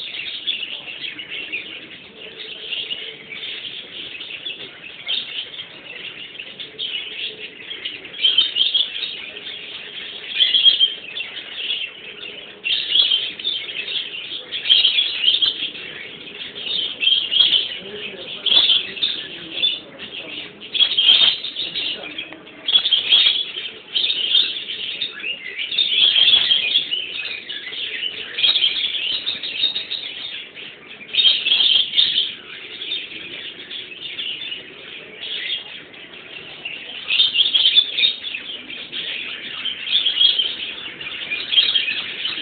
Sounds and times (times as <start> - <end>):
Animal: 0.0 - 42.4
Speech: 0.0 - 42.4.